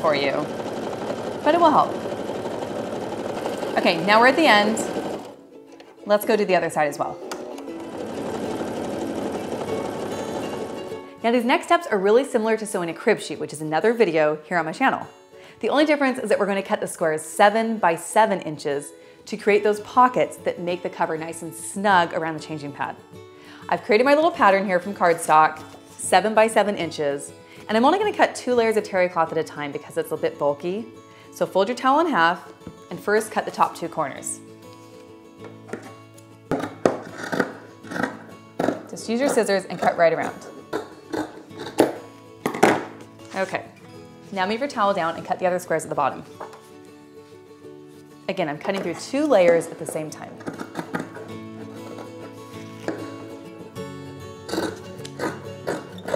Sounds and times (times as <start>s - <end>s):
Speech: 0.0s - 0.5s, 1.5s - 1.9s, 3.8s - 4.9s, 6.1s - 7.2s, 11.2s - 23.0s, 23.7s - 34.4s, 39.0s - 40.5s, 43.3s - 46.3s, 48.3s - 50.4s
Music: 0.0s - 56.1s.